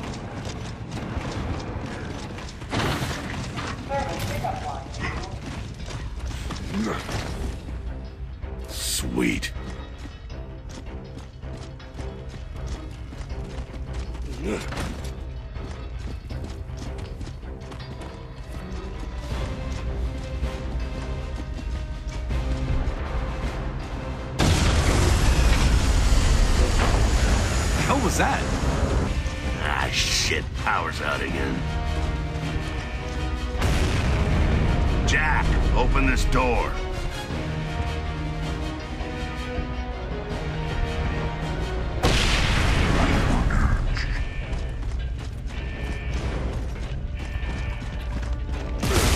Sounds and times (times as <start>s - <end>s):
Music: 0.0s - 49.1s.